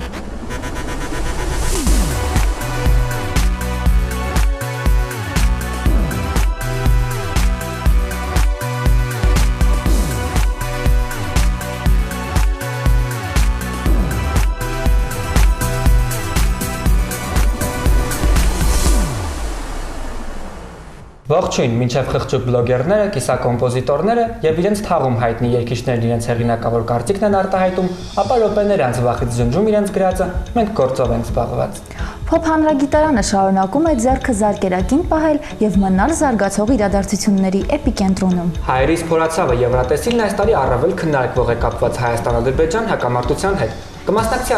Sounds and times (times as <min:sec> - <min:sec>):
Music: 0:00.0 - 0:44.5
Speech: 0:21.3 - 0:44.5.